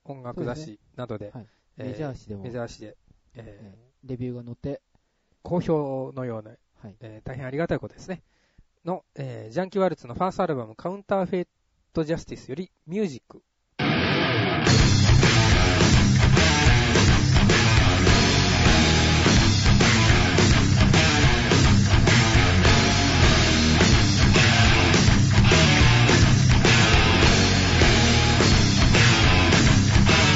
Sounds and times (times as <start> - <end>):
Speech: 0.0 - 4.8, 5.4 - 8.2, 8.8 - 13.5
Music: 13.8 - 30.3.